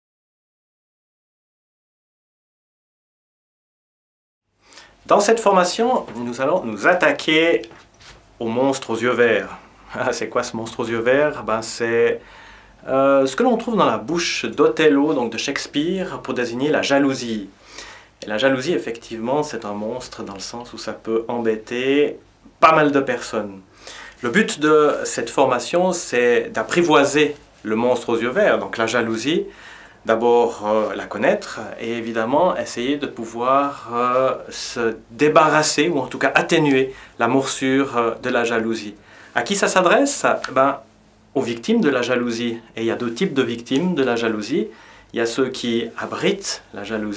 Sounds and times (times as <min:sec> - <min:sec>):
Speech: 0:05.1 - 0:07.8, 0:08.4 - 0:12.2, 0:12.8 - 0:17.5, 0:18.2 - 0:47.1.